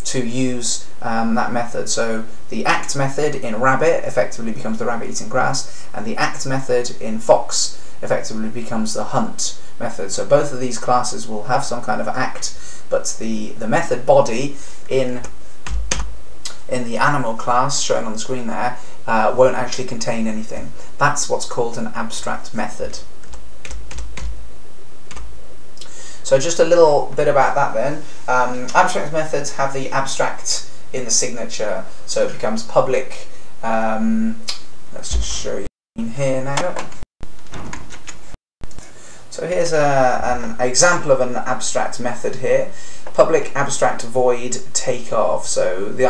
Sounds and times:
Speech: 0:00.0 - 0:15.4, 0:16.5 - 0:23.1, 0:26.2 - 0:36.9, 0:39.3 - 0:46.0
Typing: 0:23.2 - 0:24.3.

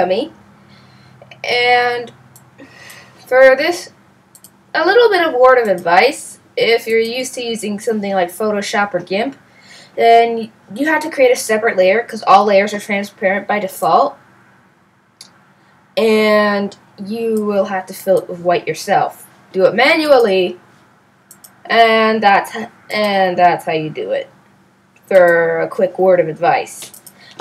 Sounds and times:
Speech: 0:00.0 - 0:00.4, 0:01.3 - 0:02.1, 0:03.3 - 0:03.9, 0:04.8 - 0:09.4, 0:10.0 - 0:14.2, 0:16.0 - 0:20.6, 0:21.7 - 0:24.3, 0:25.1 - 0:27.4.

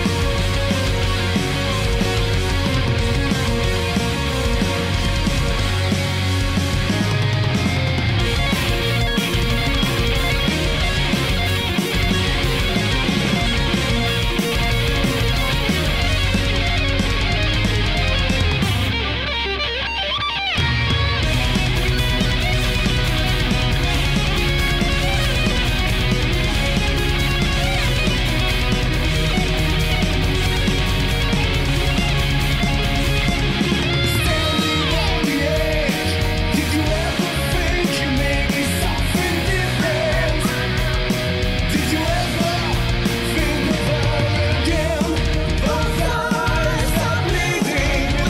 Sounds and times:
Music: 0:00.0 - 0:48.2.

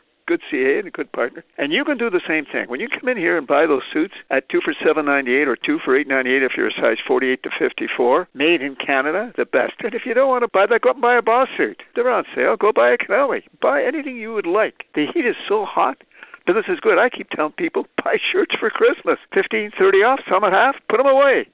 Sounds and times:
Speech: 0:00.2 - 0:21.5.

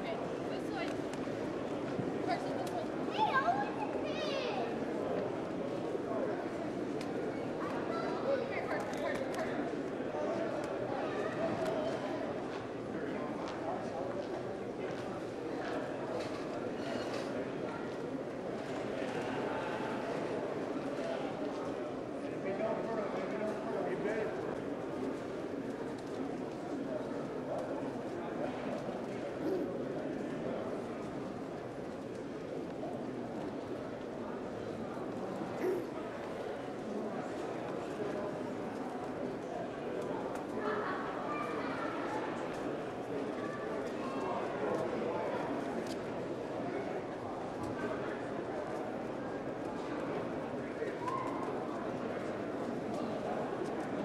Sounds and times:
Speech: 0:00.0 - 0:54.0.

